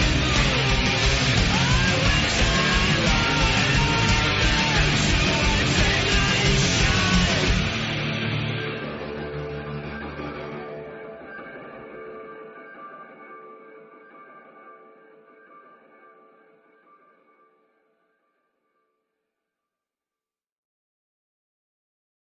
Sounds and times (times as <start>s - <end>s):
Music: 0.0s - 19.8s.